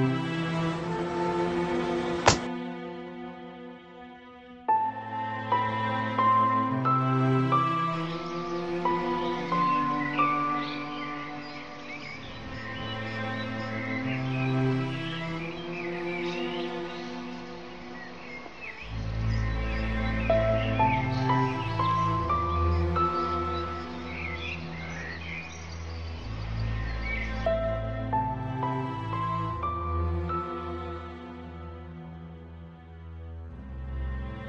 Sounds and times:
Music: 0.0s - 34.4s
Outside, rural or natural: 0.0s - 34.4s.

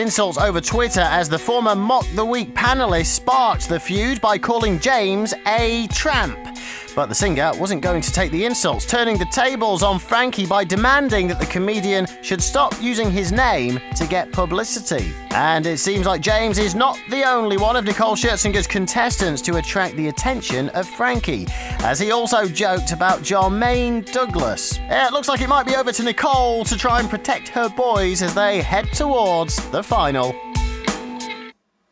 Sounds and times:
Speech: 0.0s - 30.4s
Music: 0.0s - 31.6s.

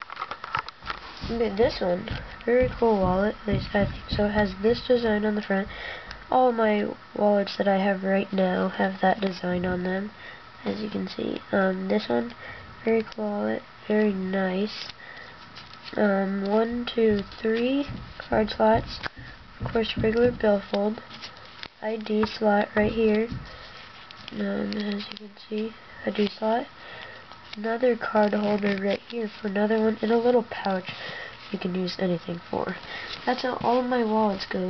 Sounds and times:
Speech: 1.2s - 5.7s, 6.3s - 14.9s, 15.9s - 19.0s, 19.7s - 21.0s, 21.8s - 23.4s, 24.3s - 26.7s, 27.6s - 30.9s, 31.5s - 34.7s.

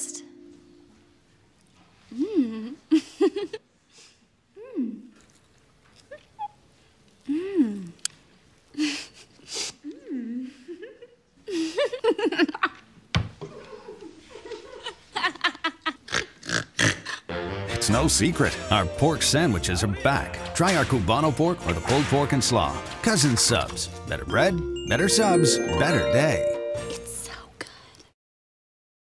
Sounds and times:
Music: 17.3s - 27.4s
Speech: 17.8s - 26.5s.

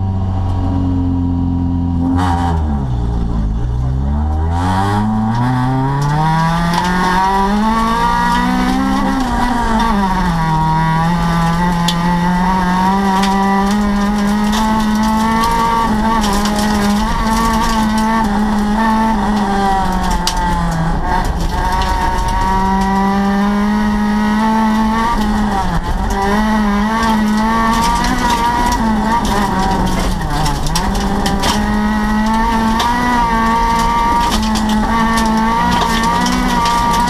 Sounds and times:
Car: 0.0s - 37.1s.

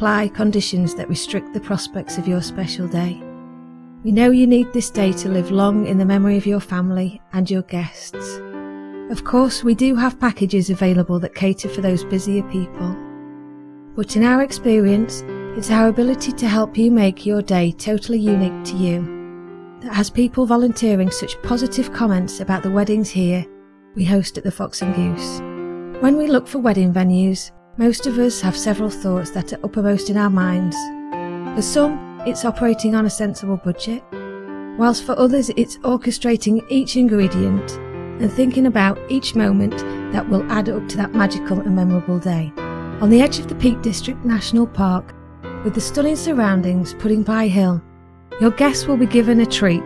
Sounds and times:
Speech: 0.0s - 3.2s, 4.0s - 8.4s, 9.1s - 13.0s, 14.0s - 19.1s, 19.8s - 34.0s, 34.8s - 47.8s, 48.4s - 49.8s
Music: 0.0s - 49.8s.

